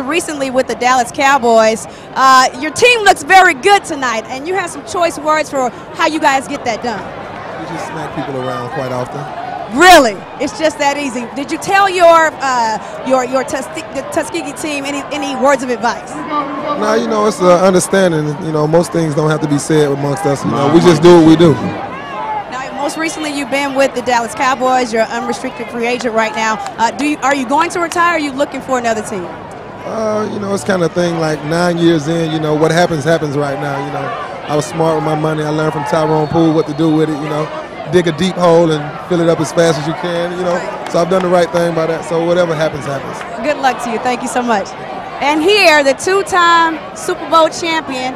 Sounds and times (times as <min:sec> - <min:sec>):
Inside, public space: 0:00.0 - 0:48.1.